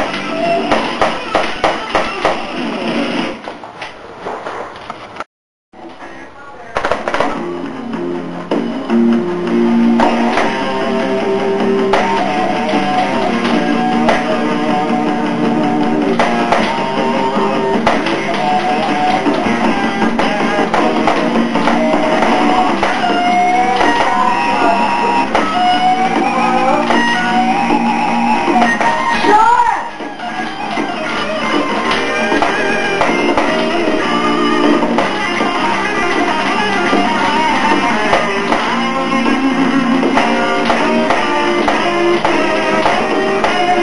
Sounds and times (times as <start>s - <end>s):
Guitar: 0.0s - 3.5s, 6.8s - 43.8s
Speech: 5.9s - 6.8s.